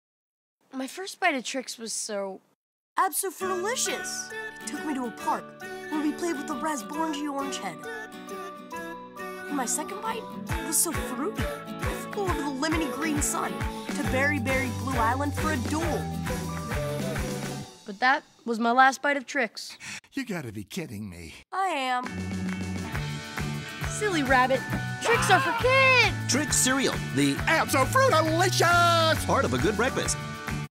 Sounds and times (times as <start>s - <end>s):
Music: 3.0s - 18.4s, 22.0s - 30.7s
Speech: 19.6s - 22.0s.